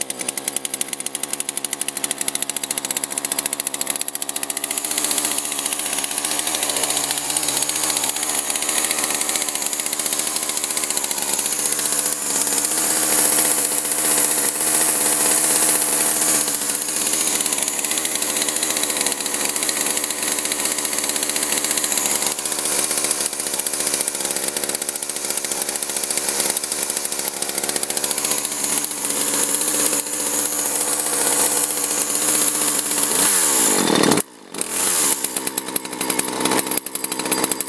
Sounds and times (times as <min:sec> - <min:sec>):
Chainsaw: 0:00.0 - 0:37.6.